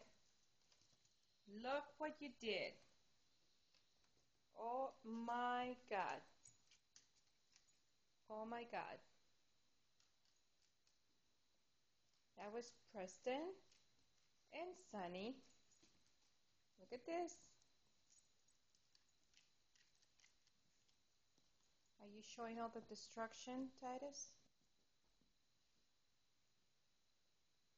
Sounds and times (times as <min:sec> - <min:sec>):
Speech: 0:01.5 - 0:02.8, 0:04.6 - 0:06.3, 0:08.3 - 0:09.1, 0:12.4 - 0:13.6, 0:14.5 - 0:15.4, 0:16.8 - 0:17.5, 0:22.0 - 0:24.4.